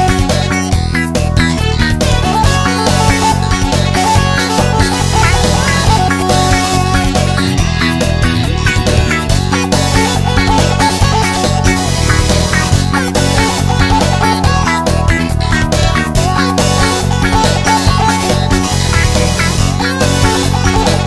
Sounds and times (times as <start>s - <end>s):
Blues: 0.0s - 21.0s.